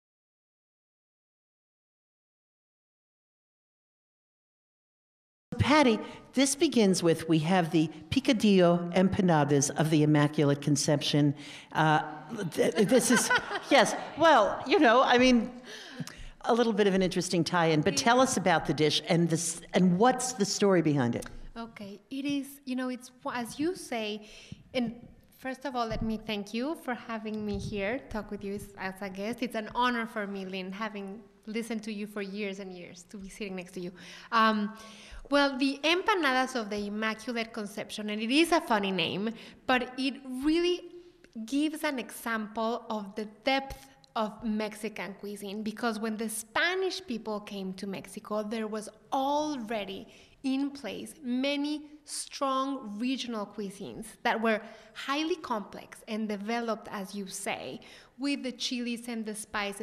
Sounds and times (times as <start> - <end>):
Female speech, woman speaking: 5.6 - 15.6, 16.4 - 24.2, 24.8 - 40.8, 41.4 - 59.8.